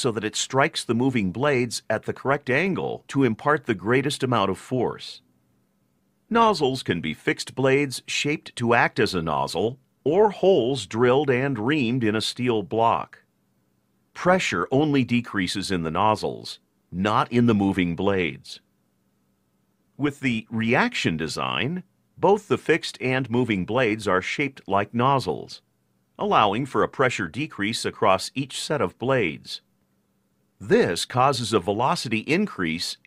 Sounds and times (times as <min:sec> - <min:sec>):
Speech: 0:00.0 - 0:05.3, 0:06.3 - 0:13.3, 0:14.2 - 0:18.7, 0:20.0 - 0:29.7, 0:30.6 - 0:33.0.